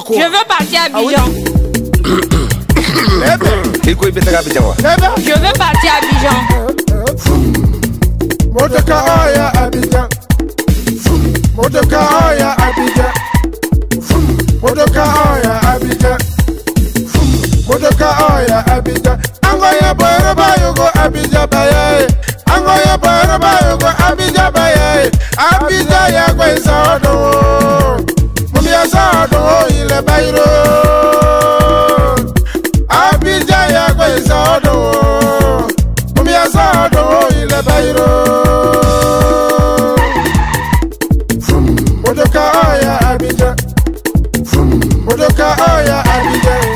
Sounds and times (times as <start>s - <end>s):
Theme music: 0.0s - 10.0s, 25.7s - 43.4s, 44.2s - 46.7s
Soundtrack music: 0.0s - 46.7s.